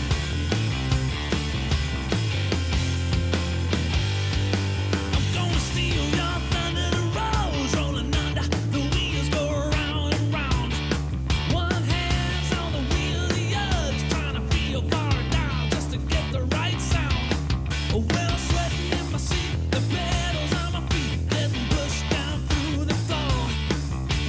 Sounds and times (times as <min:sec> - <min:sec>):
Funk: 0:00.0 - 0:24.2
Pop music: 0:05.0 - 0:17.3, 0:17.9 - 0:23.6.